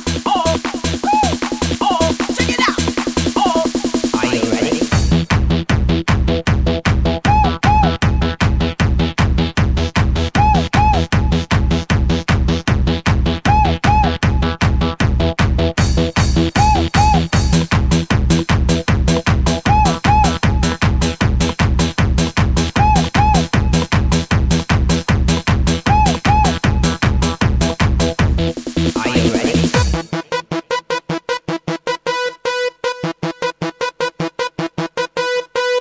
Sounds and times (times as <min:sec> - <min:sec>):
Music: 0:00.0 - 0:35.8.